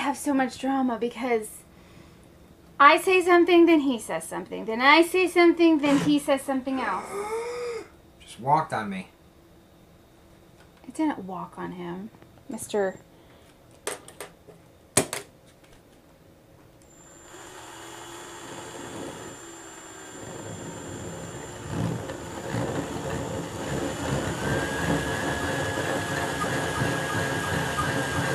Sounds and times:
Speech: 10.9s - 13.0s.

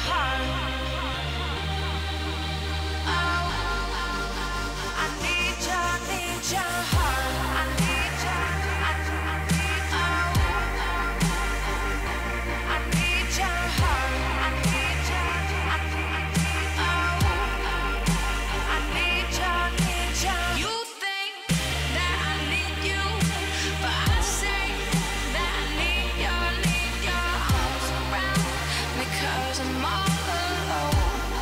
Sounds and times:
Dubstep: 0.0s - 31.4s.

